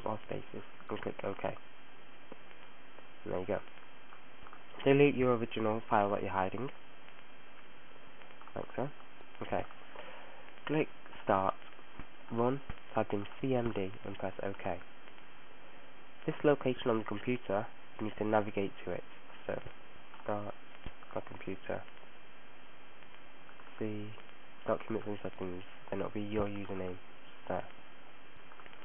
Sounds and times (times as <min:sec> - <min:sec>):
Speech: 0:00.0 - 0:01.6, 0:03.2 - 0:03.7, 0:04.8 - 0:06.8, 0:08.6 - 0:09.7, 0:10.7 - 0:11.6, 0:12.3 - 0:14.8, 0:16.2 - 0:21.9, 0:23.8 - 0:27.8.